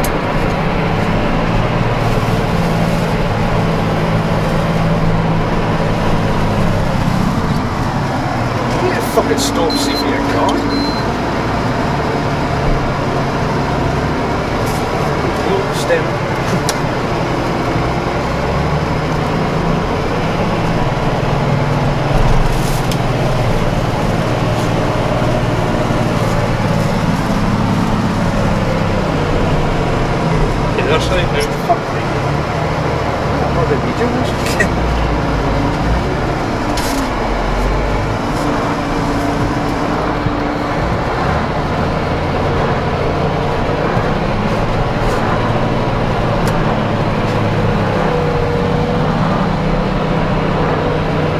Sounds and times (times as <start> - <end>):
Motor vehicle (road): 0.0 - 51.3.